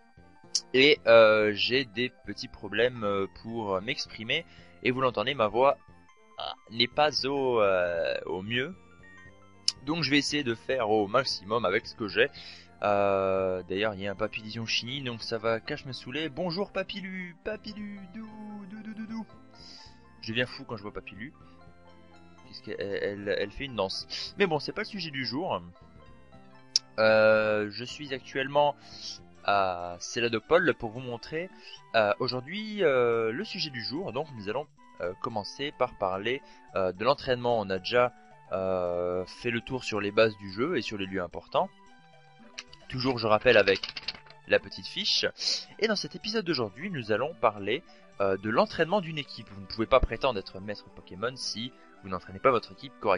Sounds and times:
Music: 0:00.0 - 0:53.1
Speech: 0:00.6 - 0:05.8, 0:06.4 - 0:08.8, 0:09.7 - 0:19.3, 0:20.2 - 0:21.3, 0:22.5 - 0:25.7, 0:26.8 - 0:41.7, 0:42.7 - 0:43.9, 0:44.5 - 0:53.1.

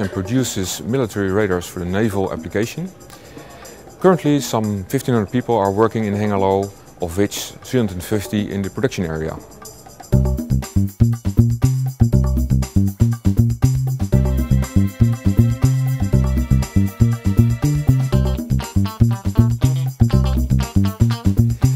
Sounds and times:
Speech: 0:00.0 - 0:03.0, 0:04.0 - 0:09.7
Music: 0:00.0 - 0:21.7.

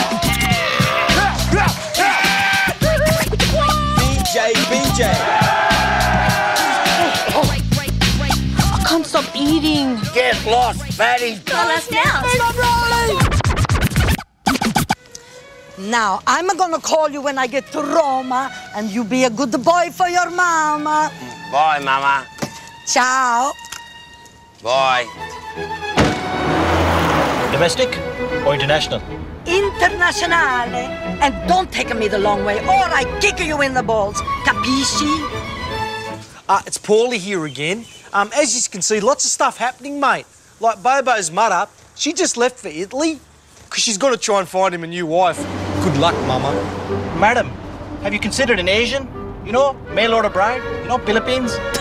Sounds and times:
Music: 0:00.0 - 0:36.4, 0:45.6 - 0:51.8.

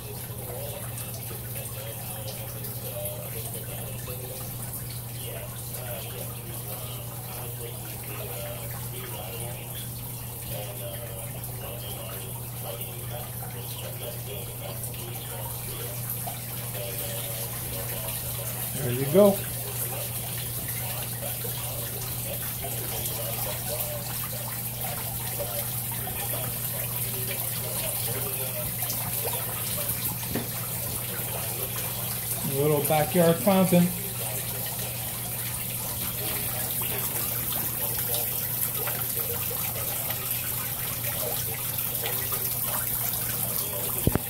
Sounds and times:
Speech: 0:00.0 - 0:44.2
Trickle, dribble: 0:00.0 - 0:44.2
Water: 0:00.0 - 0:44.2.

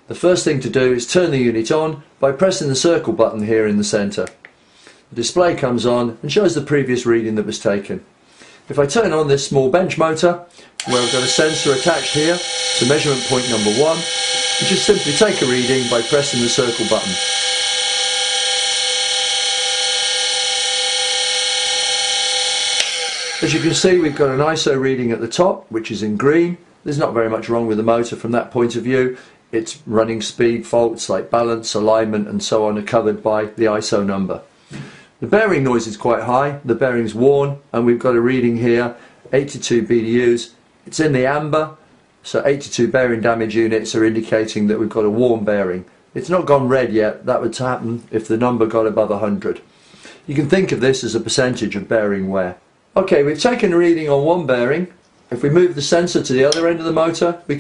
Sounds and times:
Speech: 0:00.1 - 0:04.4, 0:05.1 - 0:08.1, 0:08.7 - 0:17.2, 0:23.4 - 0:34.5, 0:35.2 - 0:49.7, 0:50.3 - 0:57.6
Vibration: 0:10.8 - 0:21.1, 0:21.7 - 0:24.6.

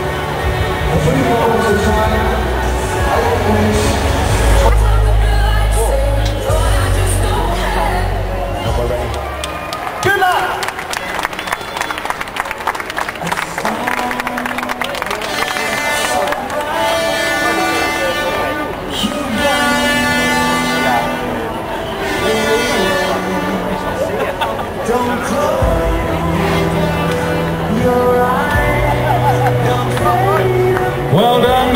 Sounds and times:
Music: 0:00.0 - 0:10.0, 0:10.6 - 0:31.7
Crowd: 0:00.0 - 0:31.7.

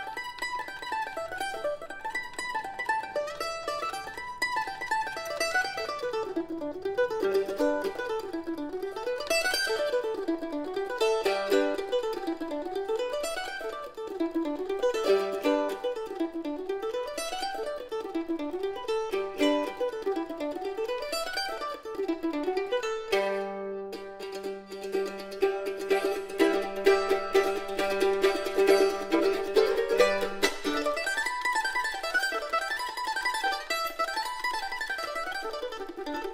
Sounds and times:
Mandolin: 0:00.0 - 0:36.3.

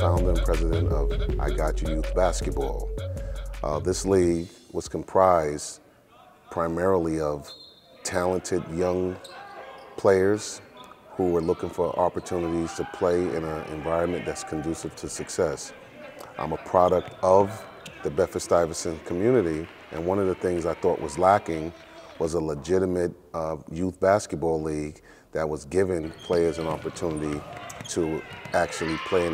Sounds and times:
Speech: 0:00.0 - 0:02.9, 0:03.6 - 0:29.3
Basketball bounce: 0:26.6 - 0:28.8.

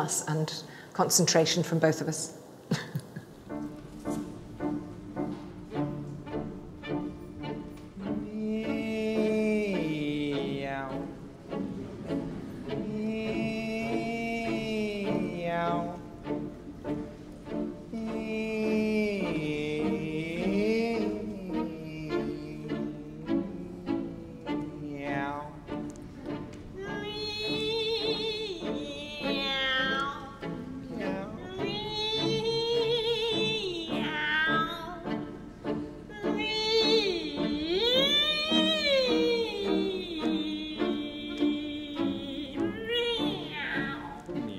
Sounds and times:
Music: 0:03.2 - 0:44.5.

